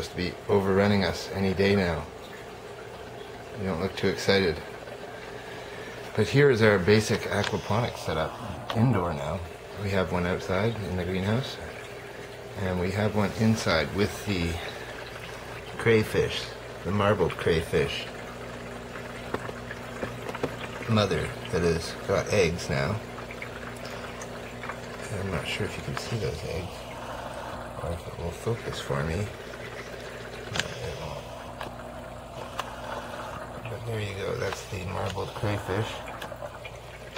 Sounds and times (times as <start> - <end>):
Speech: 0.0 - 2.1, 3.6 - 4.7, 6.2 - 11.8, 12.6 - 14.8, 15.8 - 18.2, 20.8 - 23.1, 25.0 - 26.8, 27.8 - 29.4, 30.5 - 31.3, 33.7 - 36.1.